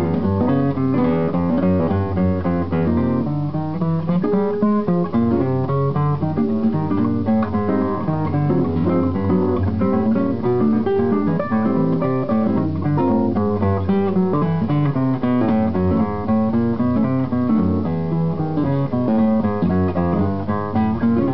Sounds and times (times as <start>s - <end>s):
Acoustic guitar: 0.0s - 21.3s.